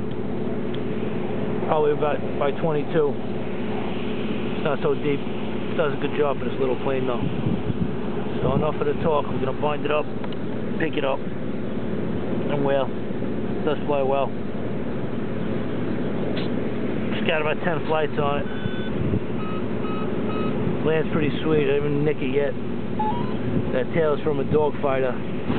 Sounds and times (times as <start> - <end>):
Speech: 1.7 - 3.2, 4.6 - 5.2, 5.8 - 7.3, 8.4 - 10.1, 10.8 - 11.2, 12.4 - 12.9, 13.6 - 14.4, 17.1 - 18.5, 20.8 - 22.6, 23.7 - 25.2.